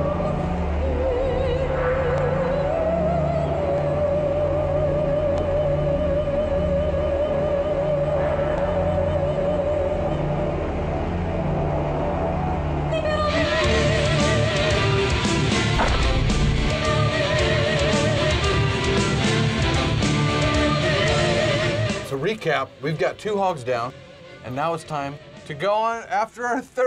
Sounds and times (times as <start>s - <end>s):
Music: 0.0s - 26.8s
Speech: 22.1s - 26.8s.